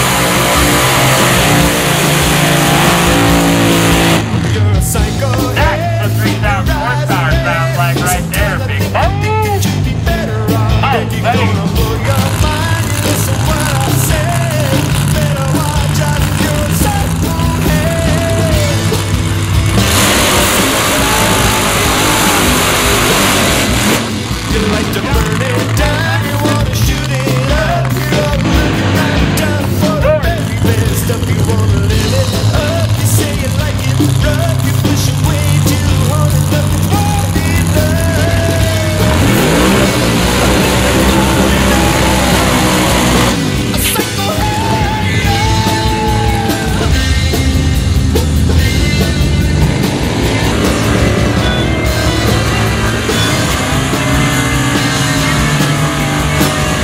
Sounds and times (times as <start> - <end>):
Car: 0.0 - 56.8
Music: 0.0 - 56.8.